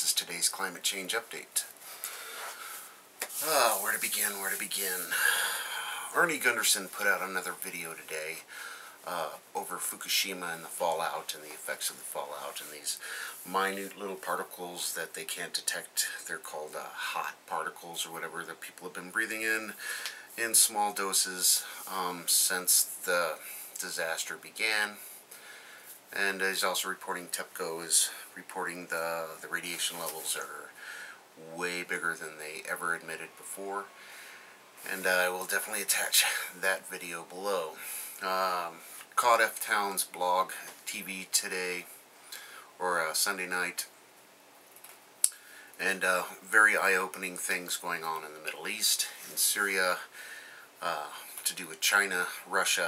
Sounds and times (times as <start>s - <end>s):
Speech: 0.0s - 1.8s, 3.3s - 5.2s, 6.1s - 25.0s, 26.1s - 30.8s, 31.4s - 33.9s, 34.8s - 41.9s, 42.8s - 43.9s, 45.8s - 50.1s, 50.8s - 52.8s.